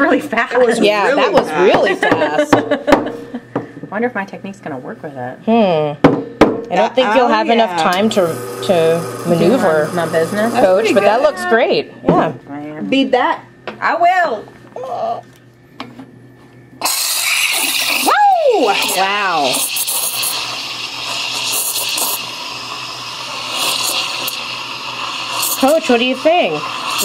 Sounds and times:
Hiss: 0:16.8 - 0:18.2, 0:19.4 - 0:27.0.

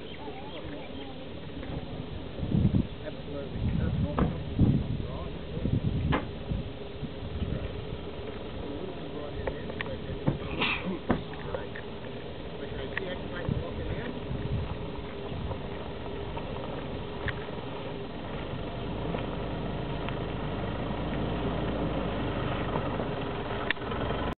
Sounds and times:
Car: 0:00.0 - 0:24.3.

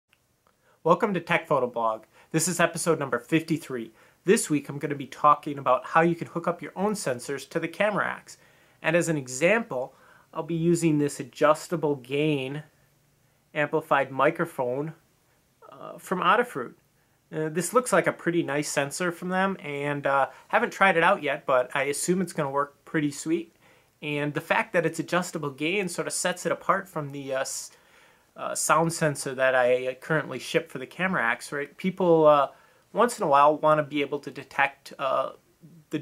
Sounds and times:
Speech: 0:00.8 - 0:12.7, 0:13.5 - 0:15.0, 0:15.6 - 0:27.8, 0:28.4 - 0:36.0.

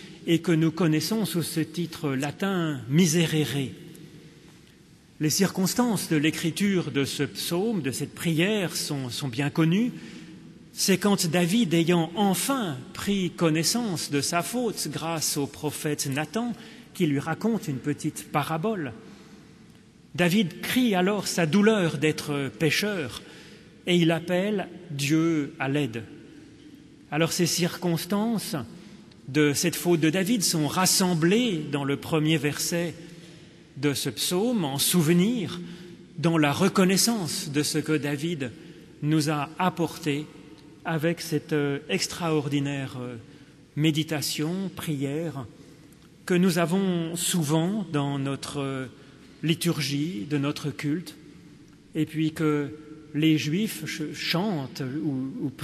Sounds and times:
Speech: 0:00.0 - 0:03.9, 0:05.2 - 0:10.0, 0:10.7 - 0:19.0, 0:20.1 - 0:26.2, 0:27.1 - 0:28.7, 0:29.3 - 0:33.1, 0:33.8 - 0:45.5, 0:46.2 - 0:51.2, 0:51.9 - 0:55.6.

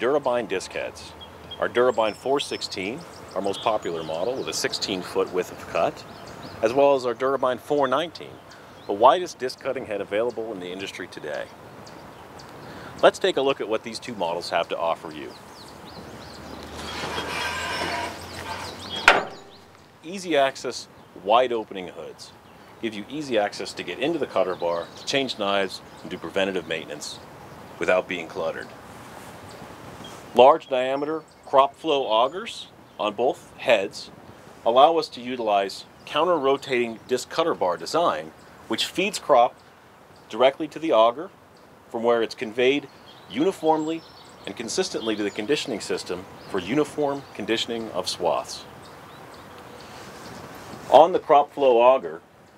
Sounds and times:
Speech: 0:00.0 - 0:06.0, 0:06.6 - 0:11.5, 0:13.0 - 0:15.4, 0:20.0 - 0:27.2, 0:27.8 - 0:28.7, 0:30.4 - 0:39.6, 0:40.3 - 0:41.3, 0:41.9 - 0:48.7, 0:50.9 - 0:52.2.

